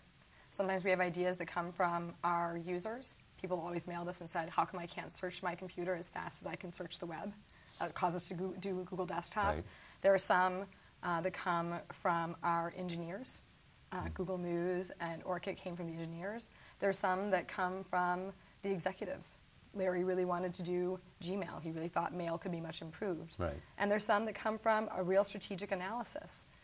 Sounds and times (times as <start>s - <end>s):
Inside, small room: 0.0s - 26.6s
Speech: 0.6s - 13.4s, 14.0s - 26.4s.